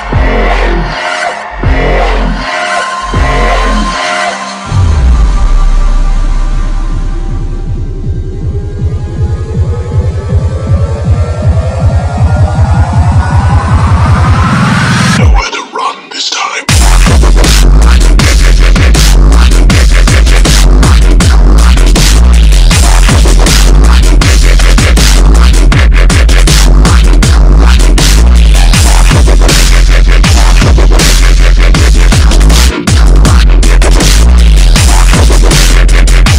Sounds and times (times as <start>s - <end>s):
Dubstep: 0.0s - 36.3s.